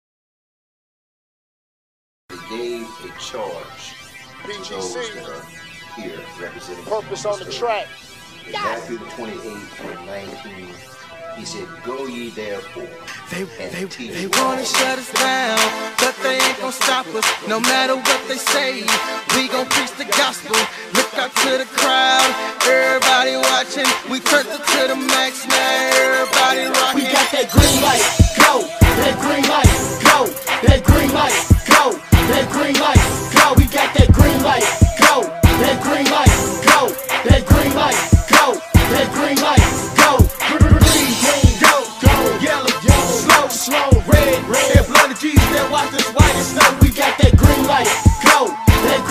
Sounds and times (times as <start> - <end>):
Dance music: 2.3 - 49.1.